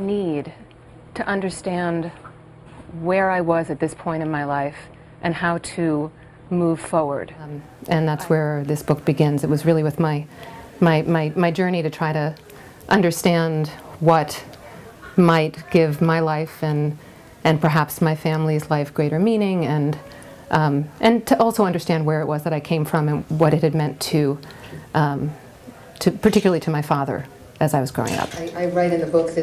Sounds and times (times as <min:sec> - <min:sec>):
Female speech, woman speaking: 0:00.0 - 0:00.6, 0:01.2 - 0:02.2, 0:02.9 - 0:25.4, 0:26.0 - 0:28.6.